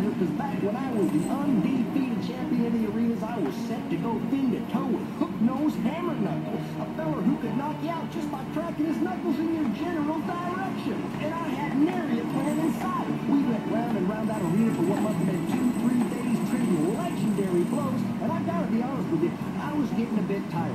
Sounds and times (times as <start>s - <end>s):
Music: 0.0s - 20.7s
Speech: 0.0s - 20.7s.